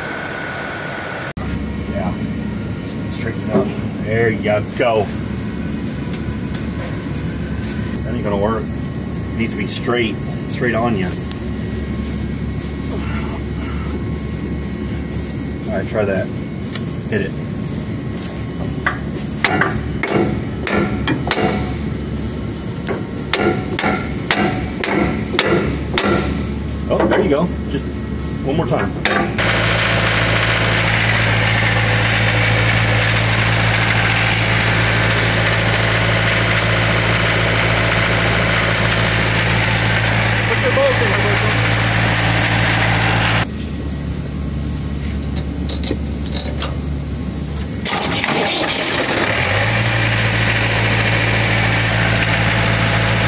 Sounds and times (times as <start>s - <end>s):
Speech: 3.1s - 5.2s, 15.7s - 16.3s, 17.1s - 17.4s, 26.9s - 29.0s, 40.5s - 41.6s.